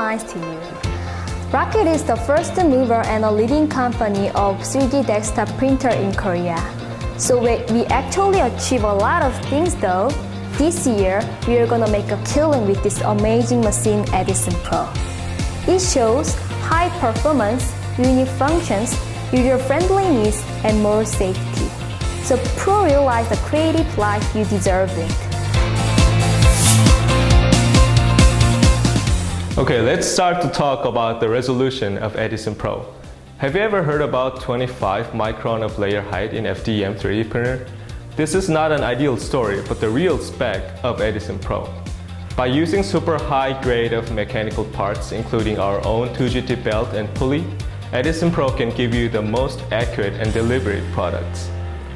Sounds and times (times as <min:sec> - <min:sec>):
Music: 0:00.0 - 0:51.9
Speech: 0:01.6 - 0:15.0, 0:29.6 - 0:41.8, 0:42.4 - 0:51.5.